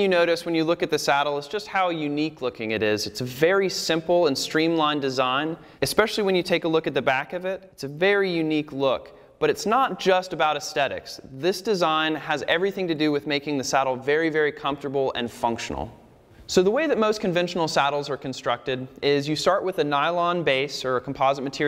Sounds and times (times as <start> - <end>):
Speech: 0.0 - 21.6.